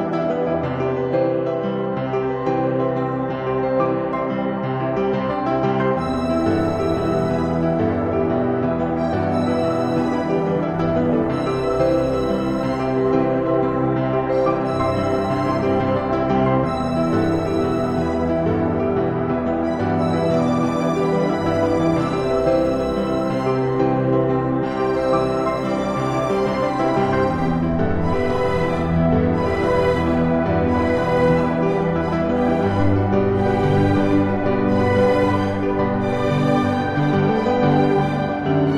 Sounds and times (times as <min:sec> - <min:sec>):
Music: 0:00.0 - 0:38.7.